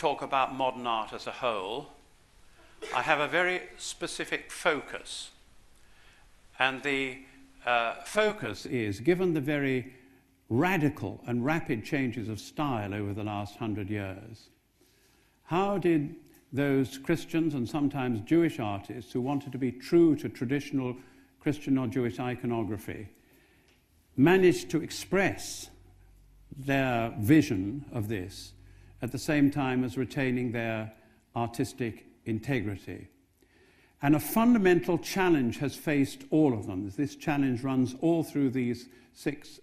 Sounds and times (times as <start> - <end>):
Speech: 0.0 - 2.0, 2.8 - 5.4, 6.6 - 9.9, 10.5 - 14.5, 15.5 - 23.1, 24.2 - 25.8, 26.5 - 33.1, 34.0 - 39.6.